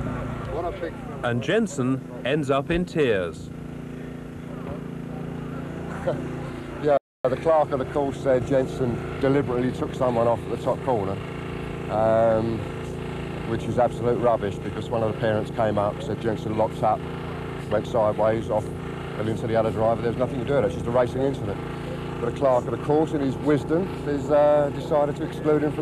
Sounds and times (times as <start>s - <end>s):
Speech: 0.5s - 3.5s, 4.5s - 11.2s, 11.9s - 12.7s, 13.5s - 17.0s, 17.7s - 25.8s.